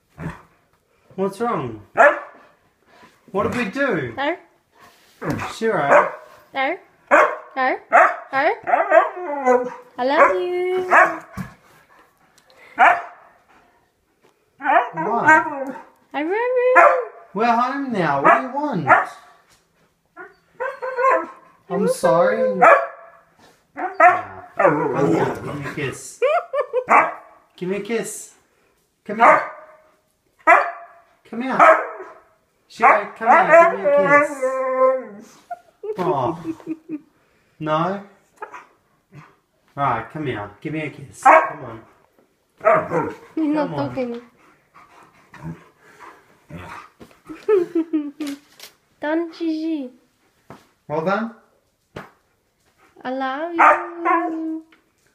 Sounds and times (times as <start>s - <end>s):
Dog: 2.0s - 2.6s, 5.2s - 6.4s, 7.1s - 12.1s, 12.7s - 13.7s, 14.6s - 16.0s, 16.8s - 17.2s, 18.2s - 19.4s, 22.4s - 23.2s, 23.8s - 25.7s, 26.8s - 27.4s, 29.2s - 34.4s, 41.2s - 42.0s, 42.6s - 47.0s, 53.6s - 54.7s.